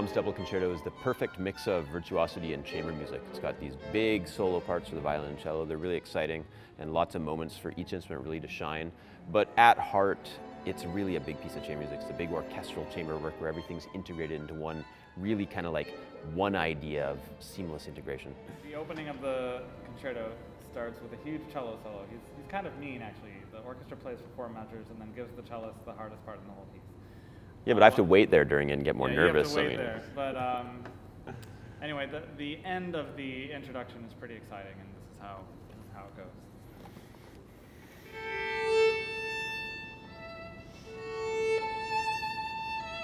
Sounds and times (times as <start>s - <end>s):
Speech: 0.0s - 26.8s, 27.7s - 30.9s, 31.8s - 36.5s.